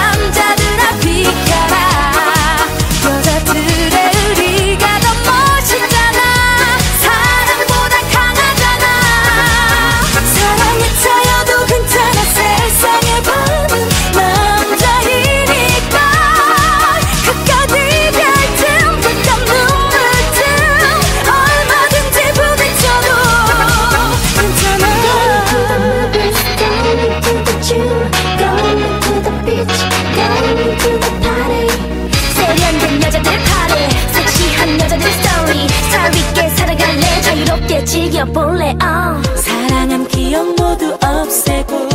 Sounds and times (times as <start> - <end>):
Music: 0.0 - 41.9.